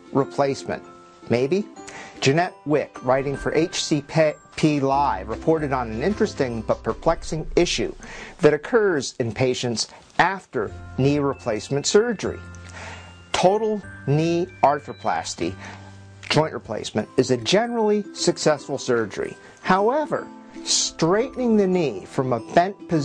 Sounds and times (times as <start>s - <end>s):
Music: 0.0s - 23.0s
Speech: 0.1s - 12.4s, 13.4s - 15.6s, 16.3s - 23.0s.